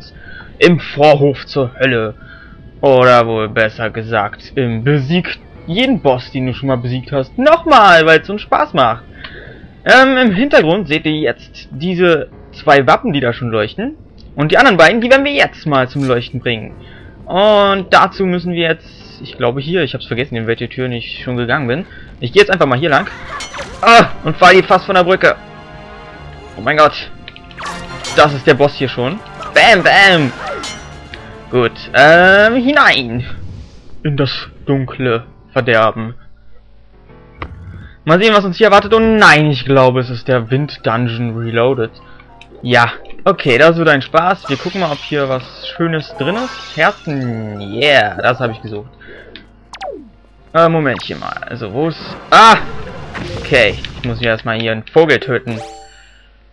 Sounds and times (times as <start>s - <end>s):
Music: 0.0s - 54.4s, 55.0s - 56.5s
Speech: 0.6s - 2.2s, 2.8s - 9.0s, 9.9s - 16.7s, 17.3s - 23.2s, 23.8s - 25.4s, 28.2s - 30.3s, 31.5s - 33.4s, 34.1s - 36.2s, 38.1s - 42.0s, 42.6s - 48.9s, 50.6s - 52.7s, 53.3s - 55.6s.